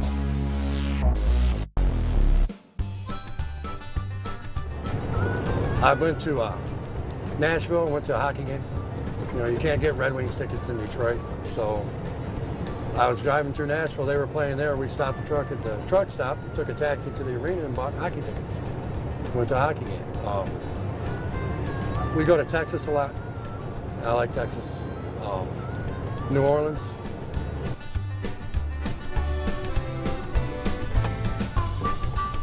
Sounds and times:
Music: 0:00.0 - 0:32.4
Truck: 0:03.0 - 0:32.4
Speech: 0:05.8 - 0:06.6, 0:07.4 - 0:08.6, 0:09.3 - 0:11.9, 0:13.0 - 0:18.4, 0:19.3 - 0:20.6, 0:22.2 - 0:23.2, 0:24.0 - 0:25.6.

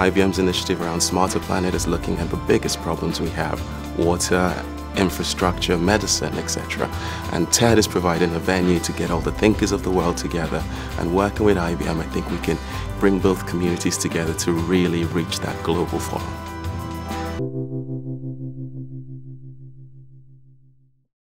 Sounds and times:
Speech: 0:00.0 - 0:16.4
Music: 0:00.0 - 0:21.0.

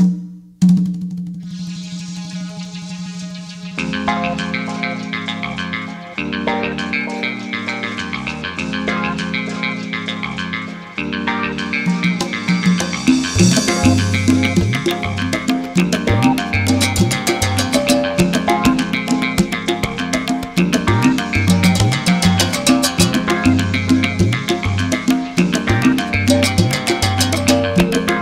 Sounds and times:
Tabla: 0:12.0 - 0:28.2.

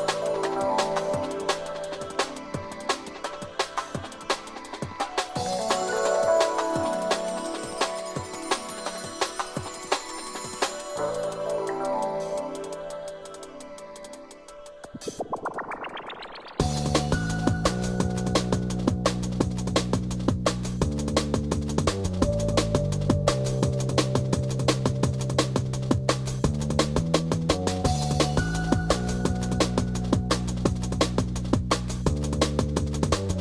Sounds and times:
Music: 0:00.0 - 0:33.4.

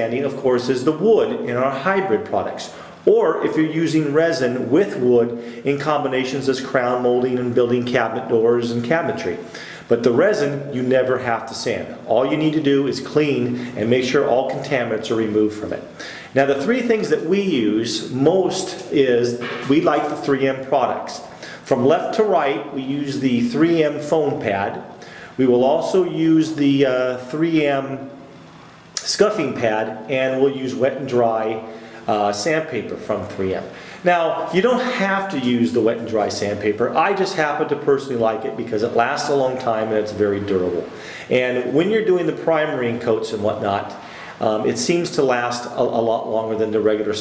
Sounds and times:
Speech: 0:00.0 - 0:28.2, 0:29.0 - 0:47.2.

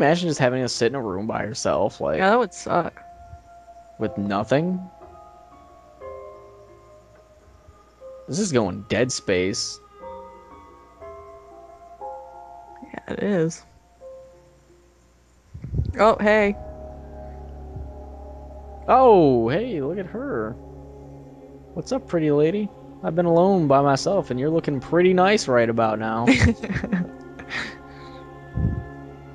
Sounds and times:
Speech: 0:00.0 - 0:03.0, 0:04.0 - 0:04.9, 0:08.3 - 0:09.8, 0:12.8 - 0:13.7, 0:15.8 - 0:16.6, 0:18.9 - 0:20.6, 0:21.8 - 0:26.7
Music: 0:00.0 - 0:29.3.

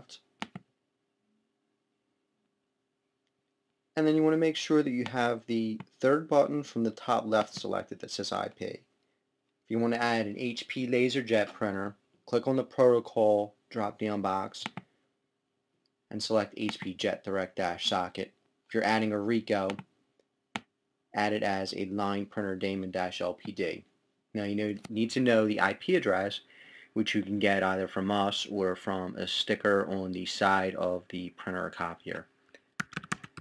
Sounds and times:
Speech: 0:00.0 - 0:00.3, 0:04.0 - 0:08.9, 0:09.7 - 0:14.8, 0:16.1 - 0:19.9, 0:21.1 - 0:32.3.

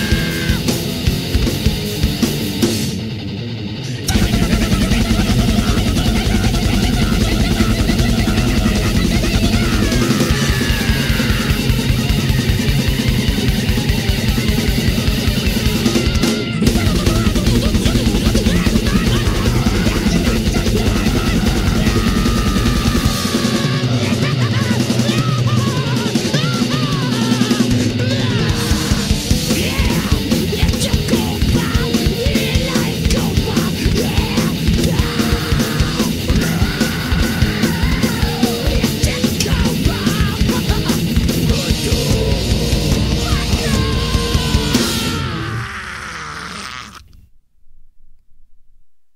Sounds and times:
Heavy metal: 0:00.0 - 0:47.1.

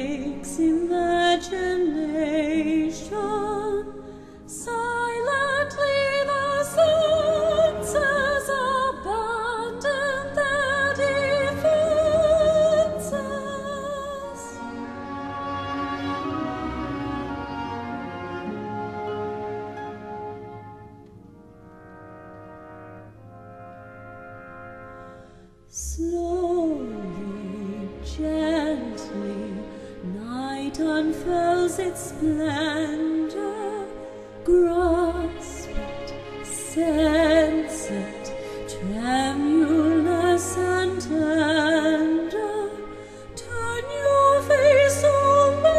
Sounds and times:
Opera: 0:00.0 - 0:45.7.

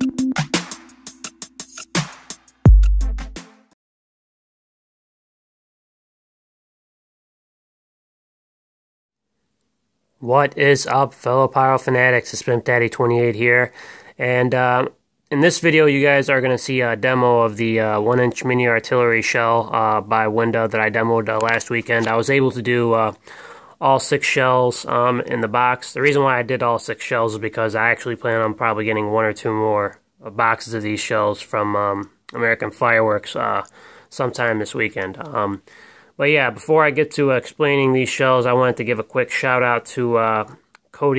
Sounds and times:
Speech: 0:10.2 - 0:23.2, 0:23.8 - 0:35.6, 0:36.2 - 0:41.1.

